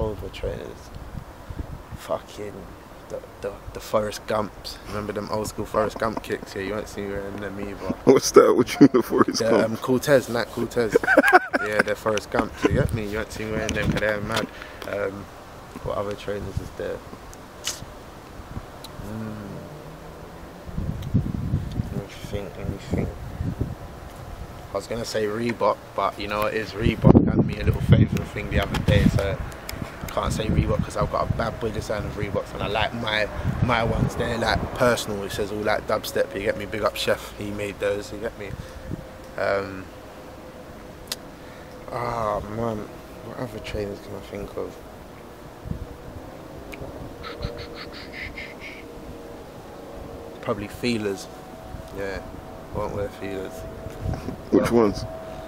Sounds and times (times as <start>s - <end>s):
Speech: 0.0s - 0.9s, 2.0s - 11.0s, 11.6s - 17.0s, 21.9s - 23.2s, 24.8s - 29.4s, 30.1s - 38.6s, 39.4s - 39.9s, 41.9s - 44.8s, 50.4s - 51.3s, 52.8s - 53.6s, 54.5s - 55.1s.